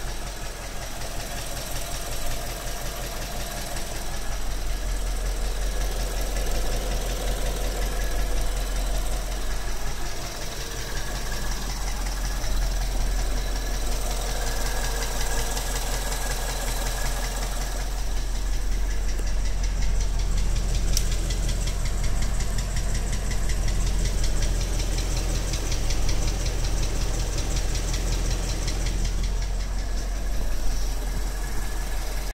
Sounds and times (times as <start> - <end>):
Engine knocking: 0.0 - 32.3.